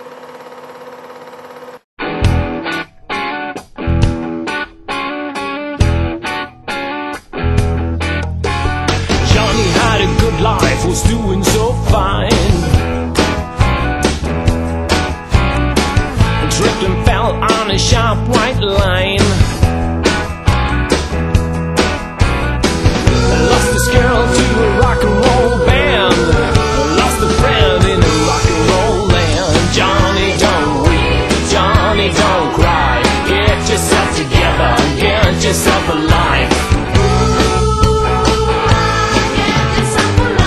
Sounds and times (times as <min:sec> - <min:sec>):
Blues: 0:02.0 - 0:40.4.